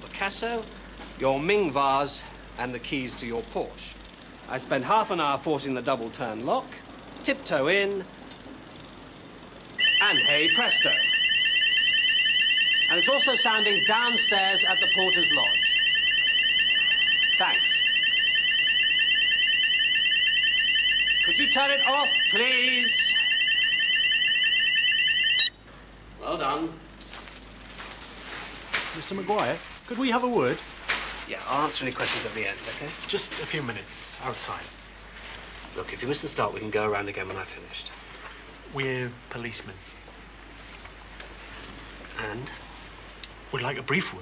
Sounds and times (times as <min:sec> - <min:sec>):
Speech: 0:00.0 - 0:08.1, 0:12.9 - 0:15.6, 0:29.0 - 0:30.6, 0:31.3 - 0:34.7, 0:35.8 - 0:37.9, 0:38.7 - 0:39.8, 0:43.5 - 0:44.2.